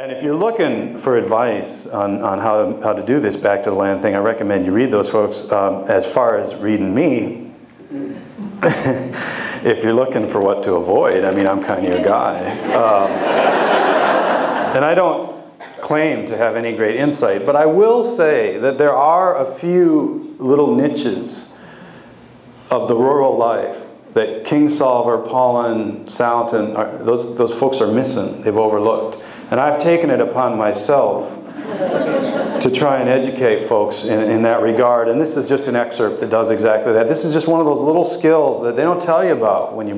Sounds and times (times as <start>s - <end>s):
Speech: 0.0s - 8.6s, 9.6s - 13.2s, 14.7s - 21.5s, 22.7s - 31.4s, 32.6s - 39.9s.